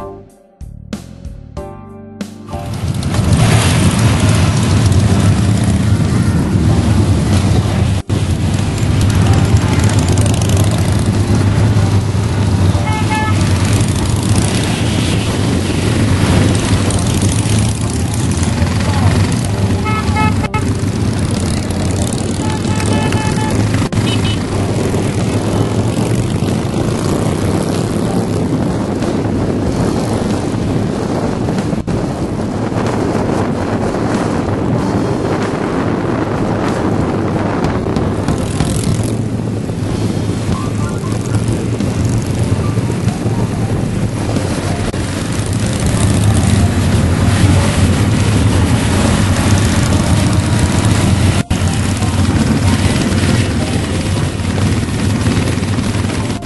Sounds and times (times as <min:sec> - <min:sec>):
Motorcycle: 0:02.5 - 0:56.4.